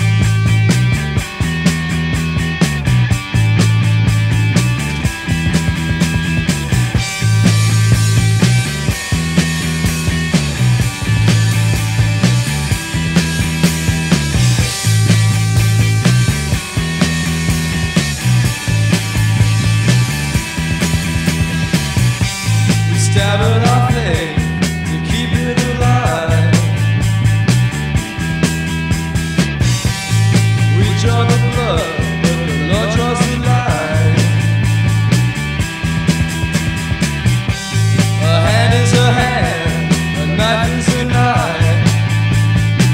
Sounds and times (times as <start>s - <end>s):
Music: 0.0s - 42.9s.